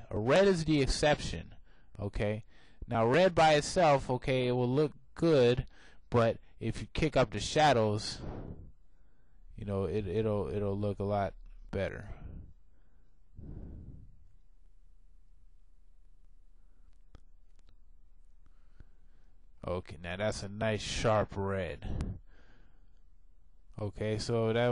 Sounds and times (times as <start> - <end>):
Speech: 0.0 - 8.2, 9.6 - 12.3, 19.6 - 22.0, 23.8 - 24.7.